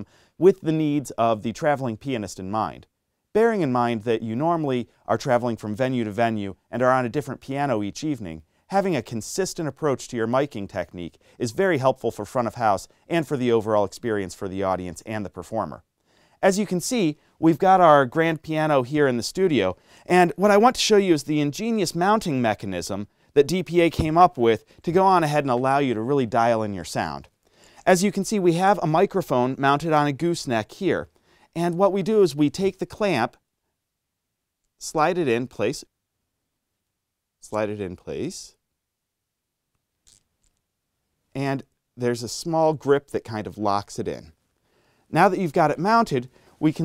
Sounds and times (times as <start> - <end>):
Speech: 0.0 - 15.8, 16.4 - 33.4, 34.8 - 35.9, 37.4 - 38.6, 41.3 - 44.4, 45.1 - 46.8.